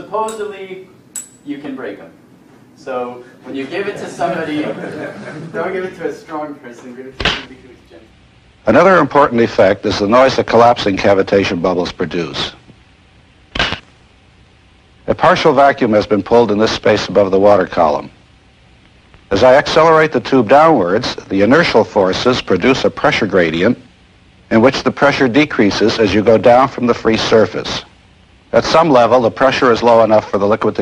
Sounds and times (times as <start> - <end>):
Speech: 0.0 - 2.2, 2.8 - 12.6, 15.1 - 18.2, 19.3 - 23.9, 24.5 - 27.9, 28.5 - 30.8.